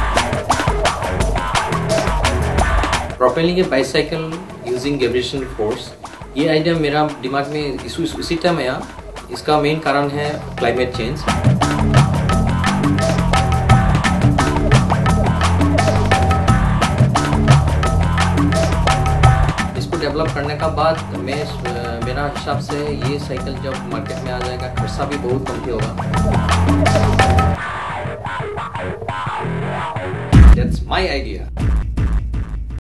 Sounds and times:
Music: 0.0 - 32.8
Speech: 3.2 - 11.3, 19.8 - 26.0, 30.6 - 31.5.

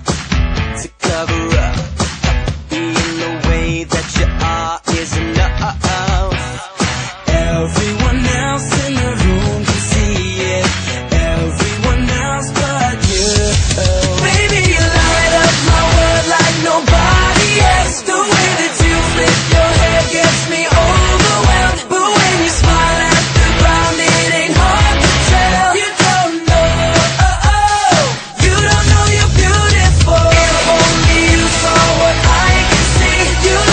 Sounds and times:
Music: 0.0 - 33.7.

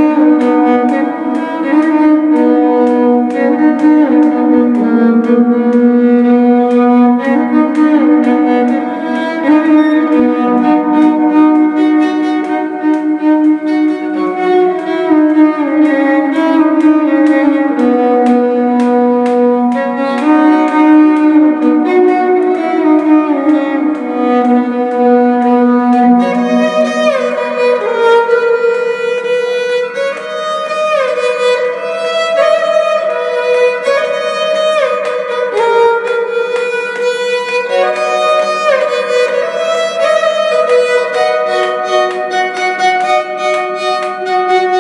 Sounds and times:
Violin, fiddle: 0.0 - 44.8.

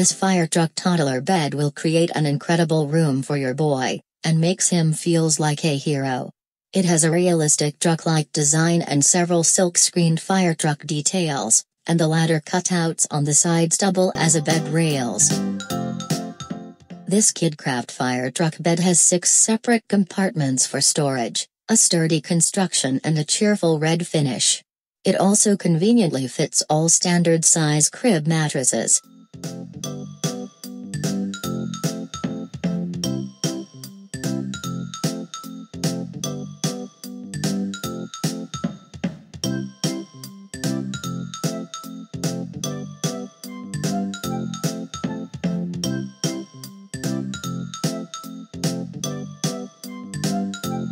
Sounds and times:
Speech: 0.0 - 15.4, 17.1 - 29.0
Music: 14.1 - 17.2, 29.0 - 50.9.

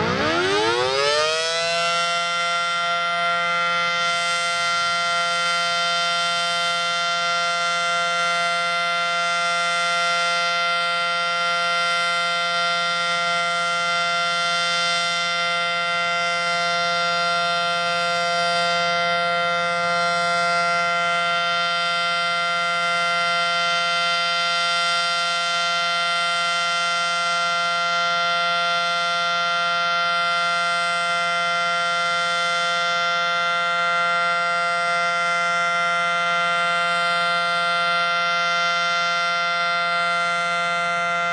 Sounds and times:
Siren: 0.0 - 41.3.

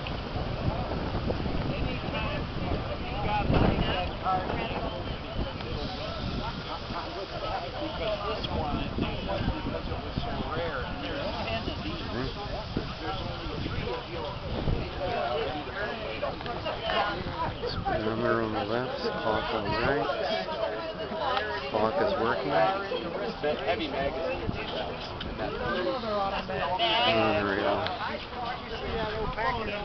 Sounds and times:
Outside, urban or manmade: 0.0 - 29.8
Speech: 1.7 - 29.8.

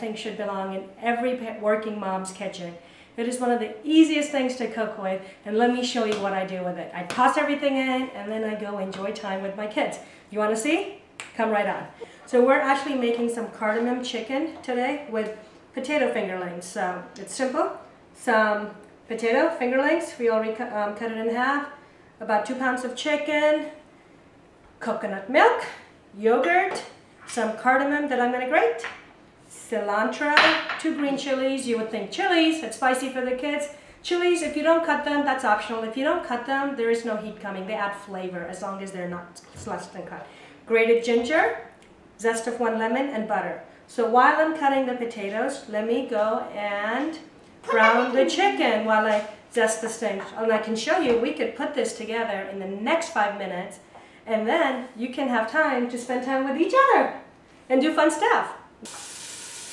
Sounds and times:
Speech: 0.0 - 23.8, 24.8 - 28.9, 29.6 - 58.6.

